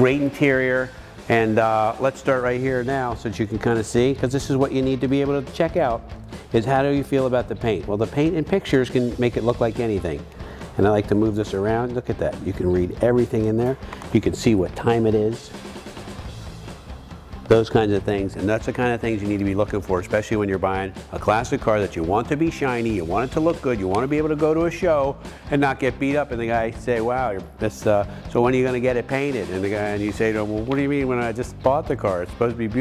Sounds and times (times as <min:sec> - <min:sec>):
Speech: 0:00.0 - 0:15.5, 0:17.5 - 0:32.8
Music: 0:00.0 - 0:32.8.